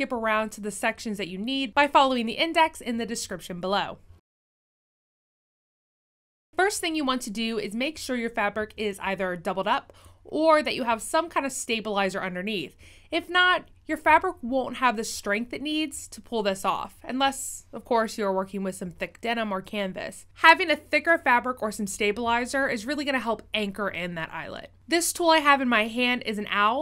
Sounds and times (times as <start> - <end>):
Speech: 0.0 - 4.0, 6.6 - 26.8.